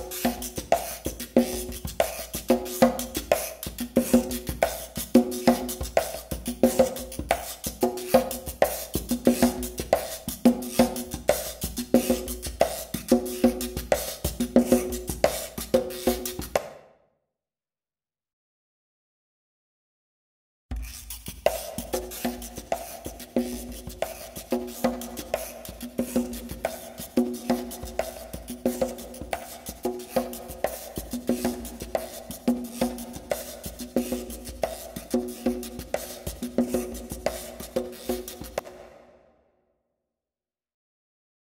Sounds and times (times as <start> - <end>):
Wood block: 0.0 - 16.9, 20.7 - 39.1.